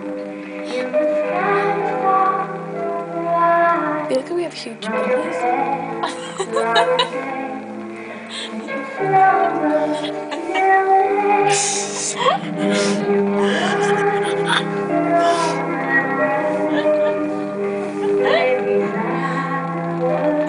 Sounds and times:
Lullaby: 0:00.0 - 0:20.4
Speech: 0:04.1 - 0:05.4.

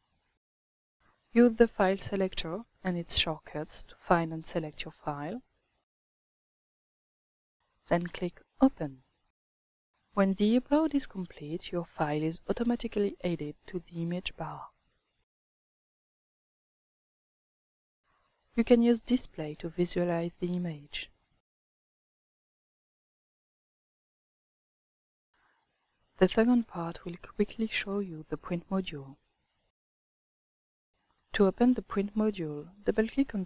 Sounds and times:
Speech: 0:01.4 - 0:05.4, 0:07.9 - 0:09.0, 0:10.2 - 0:14.7, 0:18.6 - 0:21.1, 0:26.2 - 0:29.2, 0:31.4 - 0:33.4.

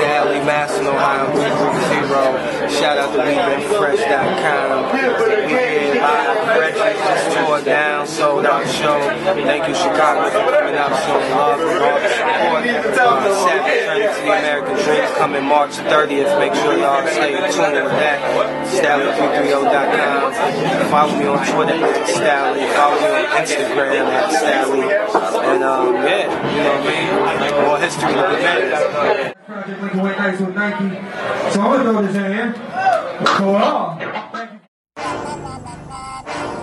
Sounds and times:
Speech: 0:00.0 - 0:34.7.

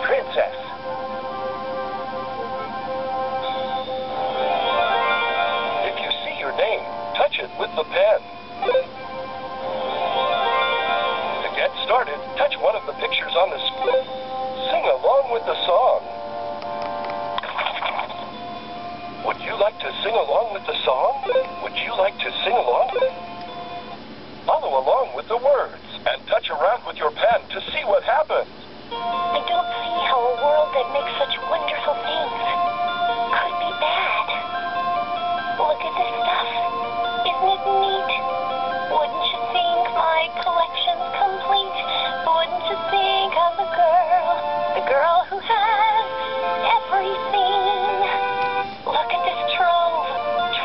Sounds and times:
Music: 0:00.0 - 0:50.6
Speech: 0:24.5 - 0:28.5.

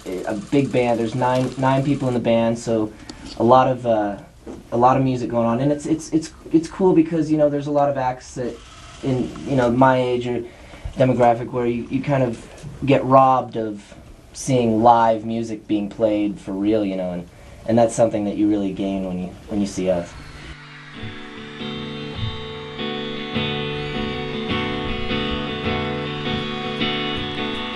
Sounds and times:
Speech: 0:00.0 - 0:20.2
Music: 0:20.1 - 0:27.7.

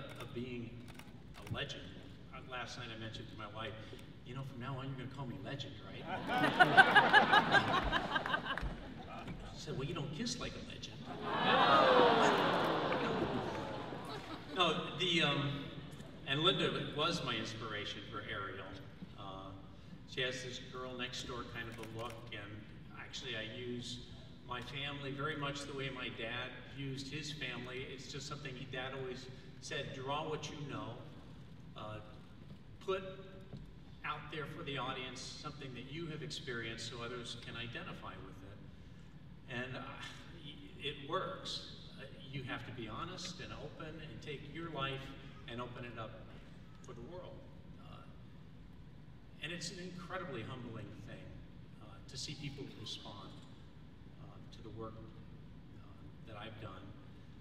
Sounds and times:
Male speech, man speaking: 0:00.0 - 0:00.8, 0:01.4 - 0:06.2, 0:09.1 - 0:11.0, 0:14.6 - 0:31.1, 0:31.8 - 0:32.2, 0:32.8 - 0:33.2, 0:34.0 - 0:38.6, 0:39.5 - 0:48.2, 0:49.4 - 0:53.5, 0:54.2 - 0:57.0
Narration, monologue: 0:00.0 - 0:57.4.

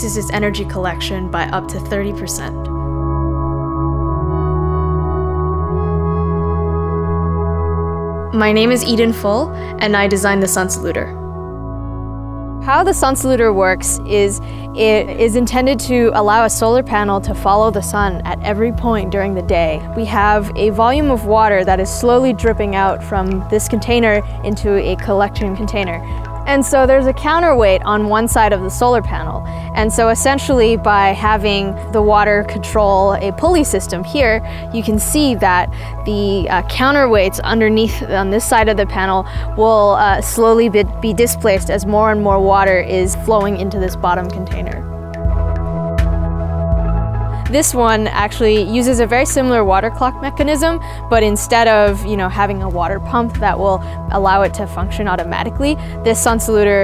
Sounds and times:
Speech: 0:00.0 - 0:02.6, 0:08.4 - 0:11.1, 0:12.6 - 0:44.8, 0:47.5 - 0:56.8
Music: 0:00.0 - 0:56.8.

